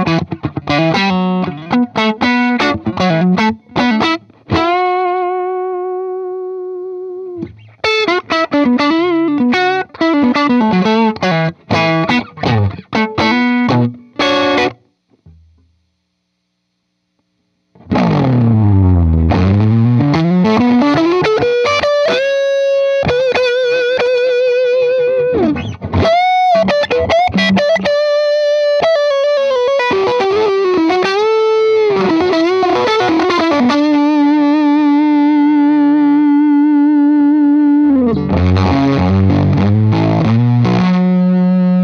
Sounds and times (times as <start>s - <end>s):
Music: 0.0s - 15.8s, 17.7s - 41.8s.